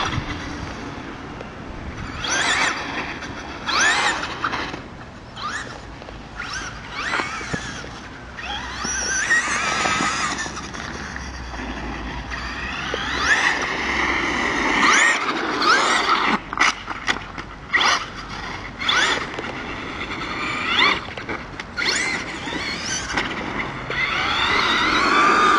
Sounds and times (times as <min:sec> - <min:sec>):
Race car, auto racing: 0:00.0 - 0:25.5.